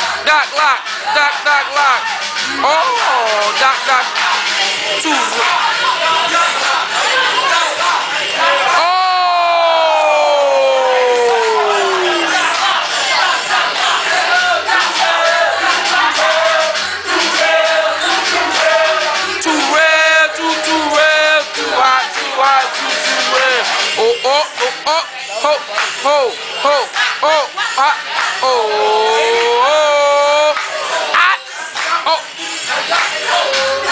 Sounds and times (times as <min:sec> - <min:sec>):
Music: 0:00.0 - 0:33.9
Speech: 0:00.2 - 0:12.3, 0:19.4 - 0:33.9.